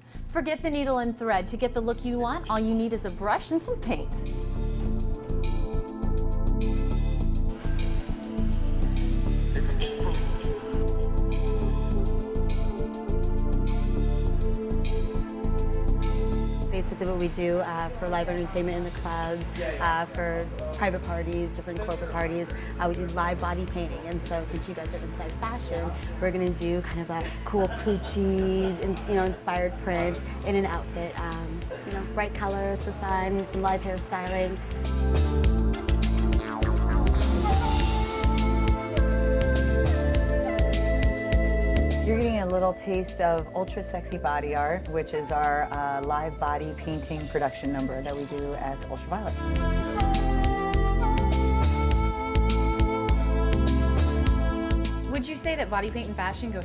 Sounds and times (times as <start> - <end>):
Music: 0.0 - 56.6
Speech: 16.8 - 34.6, 42.1 - 49.4, 55.1 - 56.6.